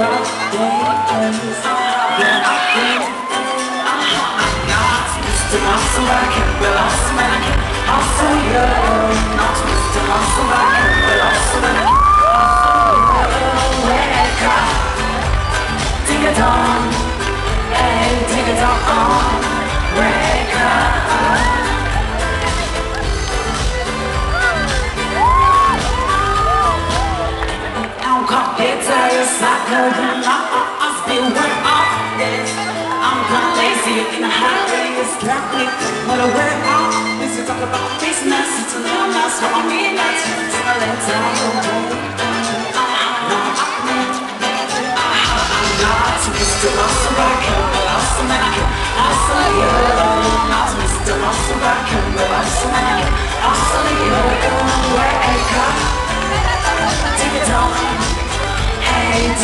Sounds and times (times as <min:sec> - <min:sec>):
Pop music: 0:00.0 - 0:59.4.